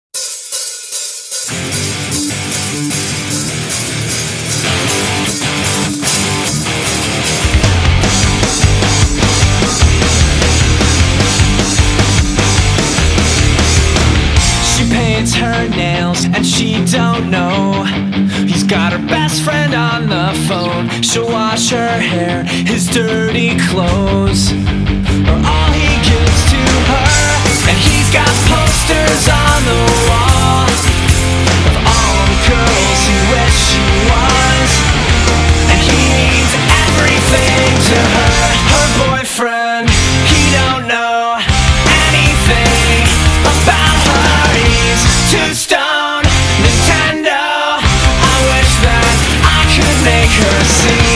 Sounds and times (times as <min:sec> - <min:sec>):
Heavy metal: 0:00.2 - 0:51.1.